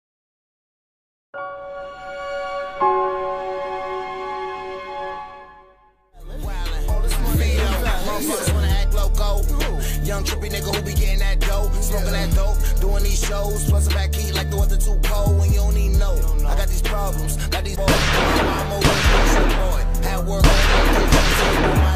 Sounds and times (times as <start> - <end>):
Music: 1.4 - 21.9.